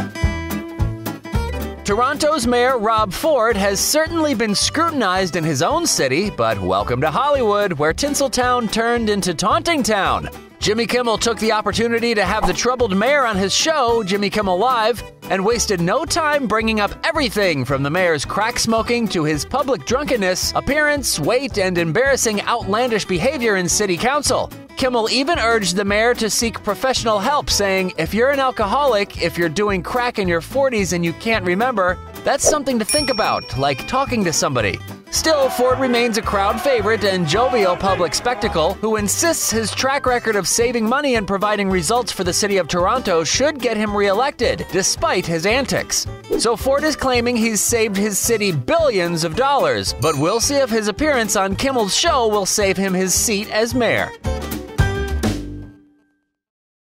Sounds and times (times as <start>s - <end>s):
Music: 0.0s - 56.5s
Speech: 1.8s - 54.2s.